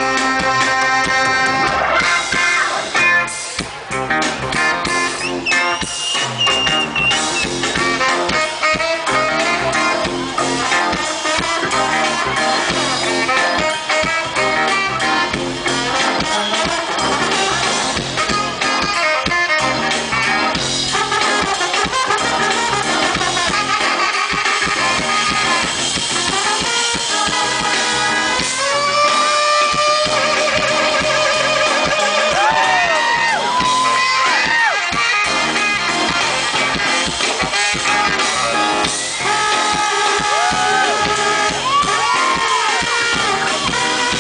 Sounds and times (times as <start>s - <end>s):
Music: 0.0s - 44.2s.